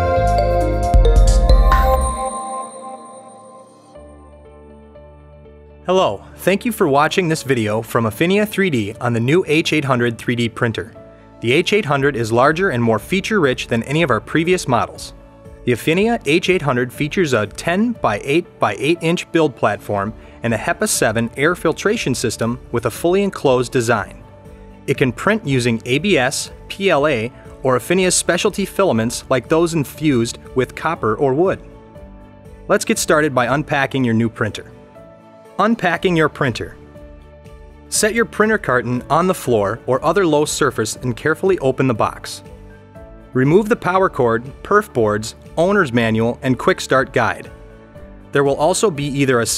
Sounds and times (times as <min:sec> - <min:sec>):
Music: 0:00.0 - 0:49.5
Speech: 0:05.9 - 0:15.1, 0:15.7 - 0:24.2, 0:24.9 - 0:31.6, 0:32.7 - 0:34.7, 0:35.6 - 0:36.8, 0:37.9 - 0:42.4, 0:43.4 - 0:47.5, 0:48.4 - 0:49.5.